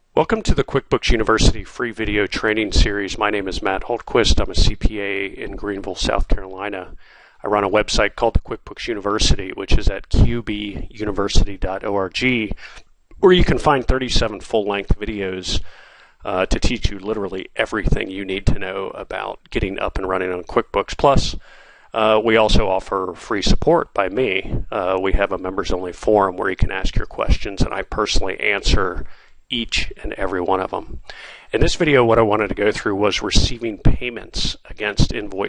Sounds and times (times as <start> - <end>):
Speech: 0.2 - 35.4.